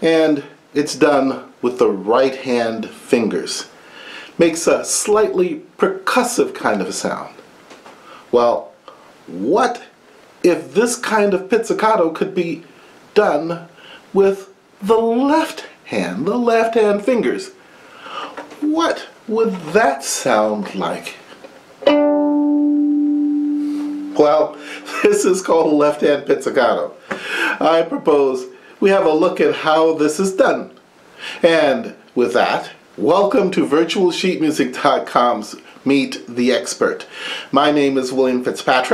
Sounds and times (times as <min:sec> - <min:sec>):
Speech: 0:00.0 - 0:03.7, 0:04.4 - 0:07.4, 0:08.3 - 0:17.6, 0:18.2 - 0:21.3, 0:24.2 - 0:30.8, 0:31.4 - 0:38.9.